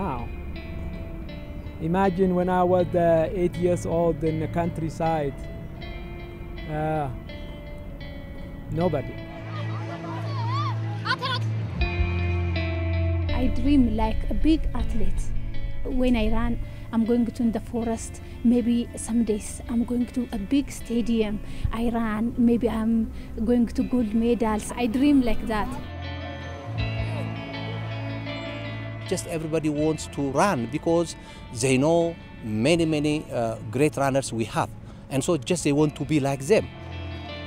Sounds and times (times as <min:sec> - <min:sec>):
Music: 0:00.0 - 0:37.4.